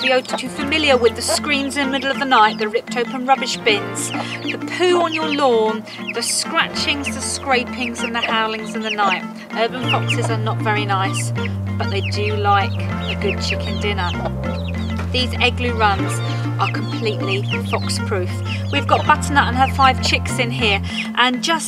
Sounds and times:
Speech: 0.0 - 14.2, 15.2 - 21.6
Music: 0.0 - 21.6.

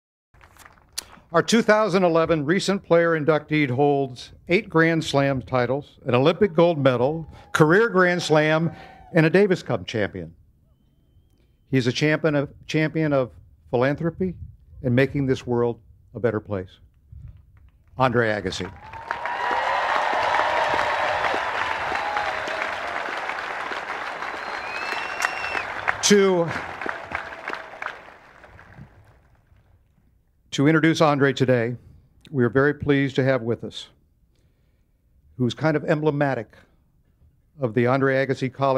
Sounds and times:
Narration, monologue: 0.8 - 10.7, 11.3 - 18.8, 29.8 - 38.7
Male speech, man speaking: 1.4 - 10.3, 11.7 - 16.8, 18.0 - 18.7, 26.0 - 26.6, 30.6 - 34.0, 35.4 - 36.6, 37.6 - 38.7.

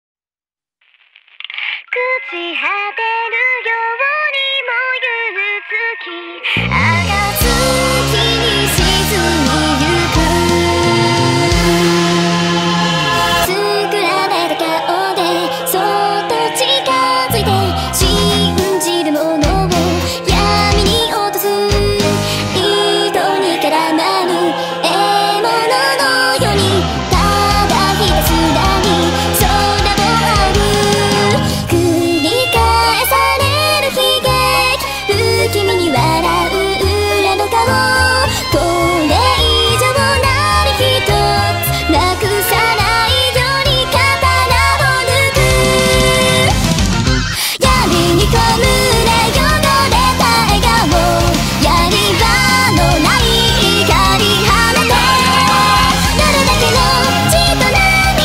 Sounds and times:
Music: 2.0 - 58.2.

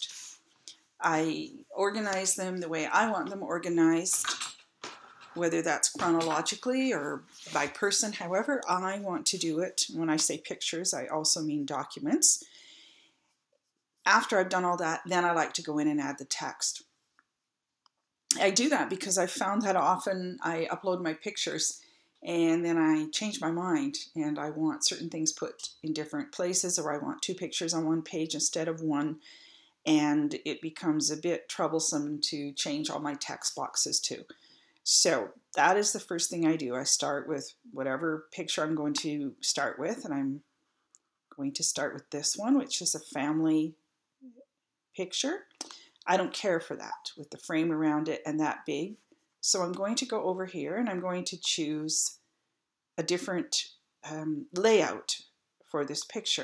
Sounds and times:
Speech: 0.0 - 0.4, 1.0 - 4.5, 5.4 - 12.4, 14.1 - 16.8, 18.3 - 29.2, 29.9 - 34.3, 34.9 - 40.4, 41.4 - 43.8, 45.0 - 52.2, 53.0 - 56.4.

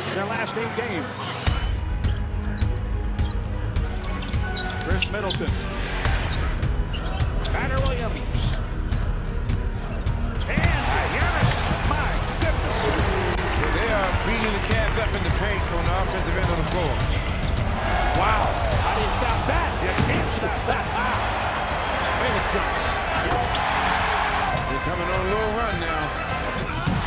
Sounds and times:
Music: 0.0 - 27.0.

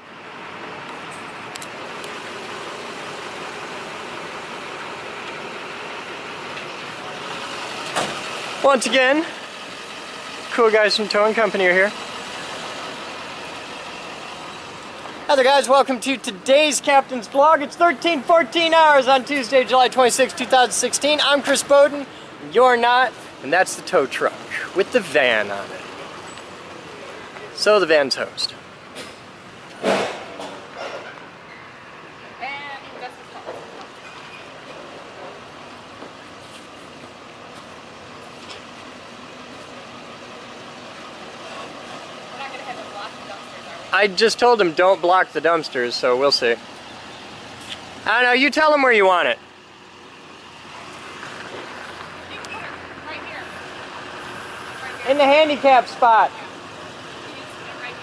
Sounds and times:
Truck: 0.0 - 58.0
Speech: 15.3 - 25.8, 48.1 - 49.4.

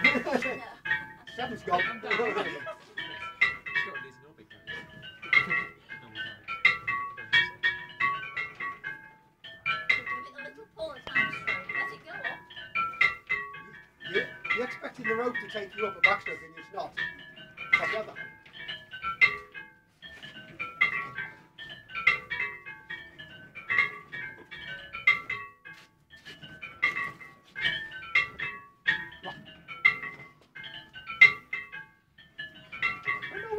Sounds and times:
Change ringing (campanology): 0.0 - 33.5.

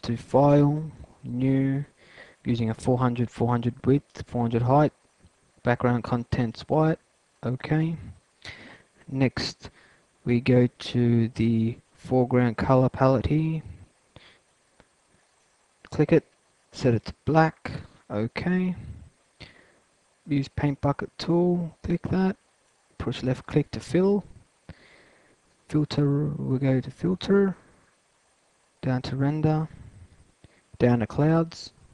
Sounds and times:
Speech: 0.0 - 5.0, 5.6 - 8.2, 9.1 - 13.8, 15.9 - 19.0, 20.3 - 22.4, 23.0 - 24.4, 25.7 - 27.7, 28.8 - 29.8, 30.8 - 31.8.

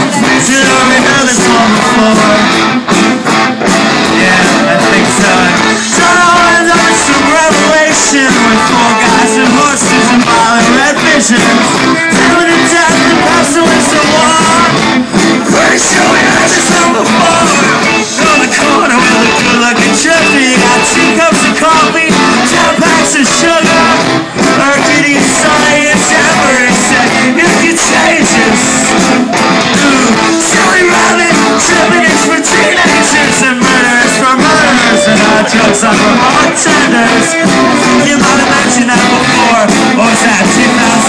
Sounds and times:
Music: 0.0 - 41.0.

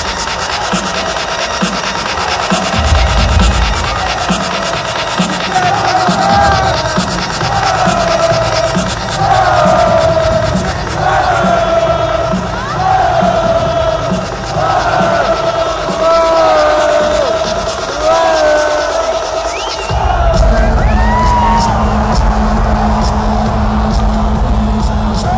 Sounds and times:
Electronic music: 0.0 - 25.3.

